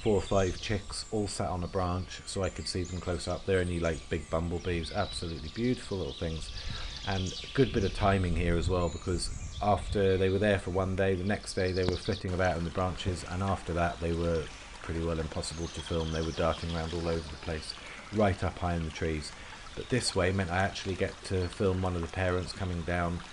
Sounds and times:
Bird: 0:00.0 - 0:23.3
Speech: 0:00.0 - 0:23.3.

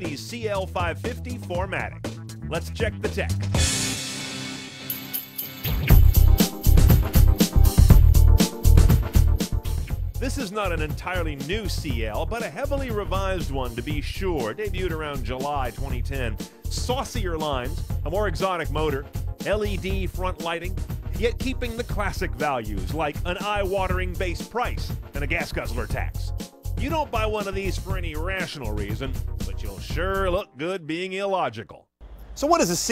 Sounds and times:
Speech: 0:00.0 - 0:03.5, 0:10.2 - 0:32.9
Music: 0:00.0 - 0:31.1.

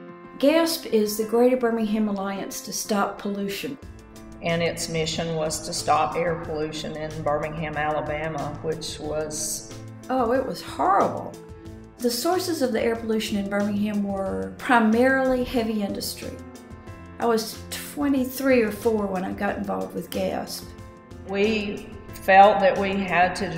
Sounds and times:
Music: 0:00.0 - 0:23.5
Speech: 0:00.4 - 0:03.8, 0:04.4 - 0:11.4, 0:12.0 - 0:16.4, 0:17.2 - 0:20.7, 0:21.3 - 0:23.5.

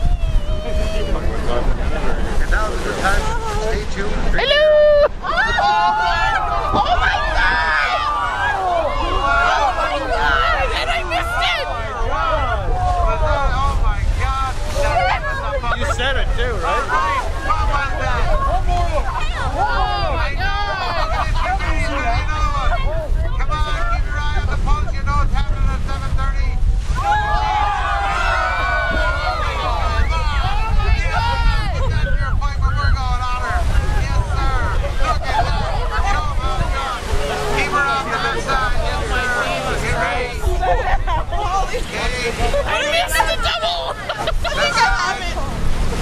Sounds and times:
Speech: 0:27.4 - 0:45.6.

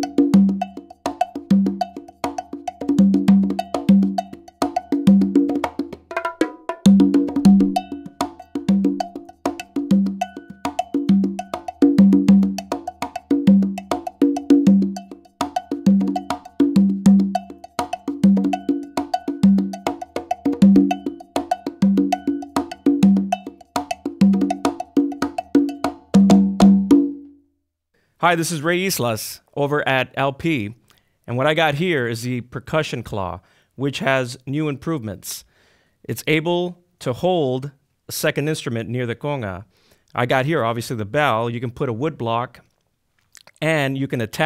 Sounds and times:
Music: 0:00.0 - 0:27.6.

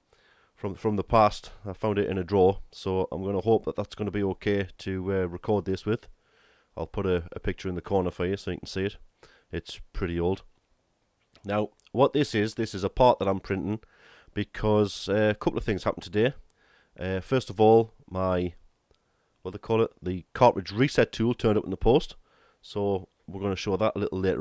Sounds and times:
Speech: 0:00.6 - 0:06.1, 0:06.8 - 0:10.5, 0:11.4 - 0:13.8, 0:14.4 - 0:16.4, 0:17.0 - 0:18.6, 0:19.4 - 0:24.4.

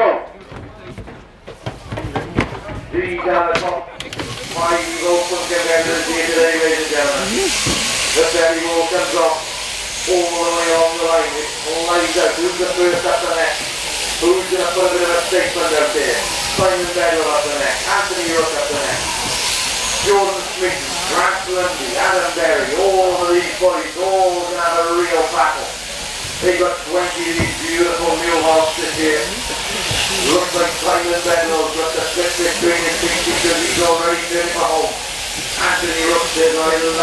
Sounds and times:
Speech: 0:00.0 - 0:01.0, 0:02.0 - 0:07.6, 0:08.2 - 0:09.5, 0:10.1 - 0:19.1, 0:20.0 - 0:25.8, 0:26.4 - 0:29.5, 0:30.2 - 0:35.0, 0:35.6 - 0:37.0.

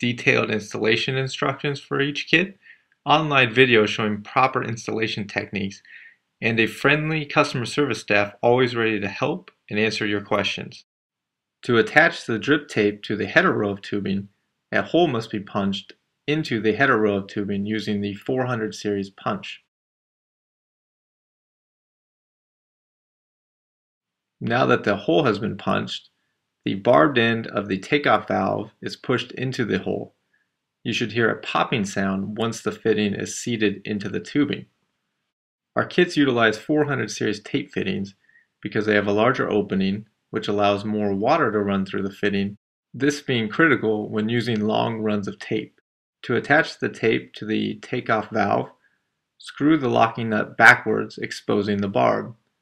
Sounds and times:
Speech: 0:00.0 - 0:10.9, 0:11.7 - 0:19.7, 0:24.4 - 0:26.1, 0:26.7 - 0:30.1, 0:30.9 - 0:34.7, 0:35.8 - 0:48.8, 0:49.4 - 0:52.4.

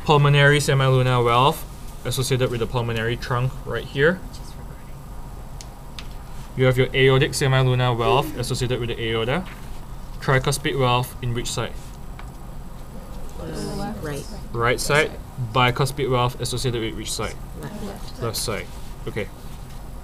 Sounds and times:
Speech: 0:00.0 - 0:04.8, 0:06.6 - 0:09.5, 0:10.2 - 0:11.8, 0:13.4 - 0:19.3.

